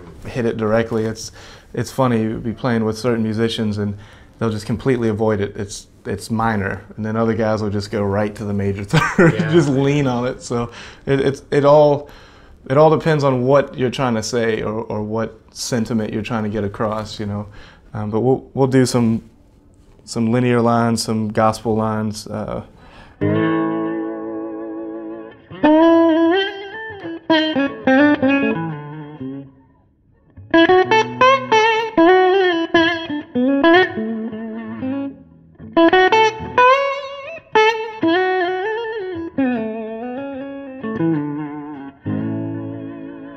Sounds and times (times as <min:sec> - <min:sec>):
Speech: 0:00.0 - 0:12.1, 0:12.7 - 0:19.3, 0:20.0 - 0:22.7.